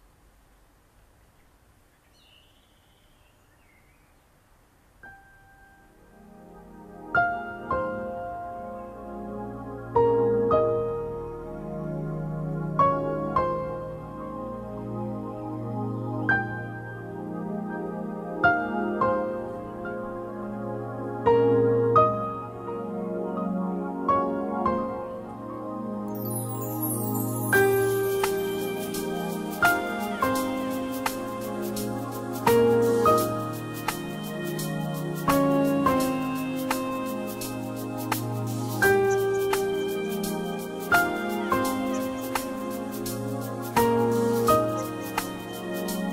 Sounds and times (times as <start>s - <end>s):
Music: 5.1s - 46.1s.